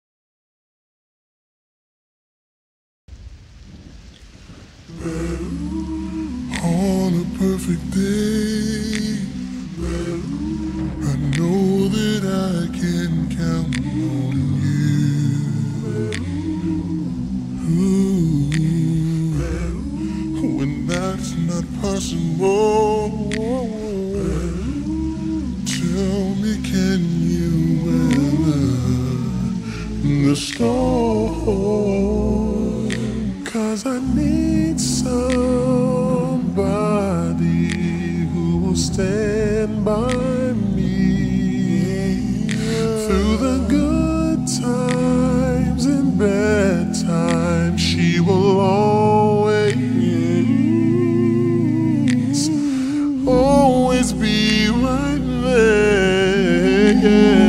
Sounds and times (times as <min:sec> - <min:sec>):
Music: 0:04.9 - 0:57.4.